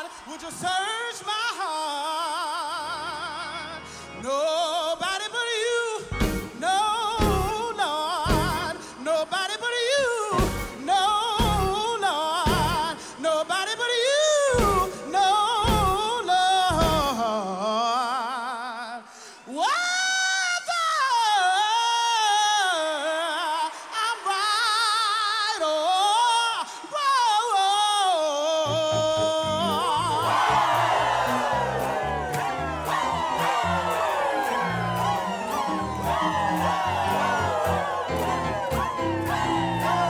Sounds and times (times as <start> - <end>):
Music: 0.0 - 18.4, 27.7 - 40.0.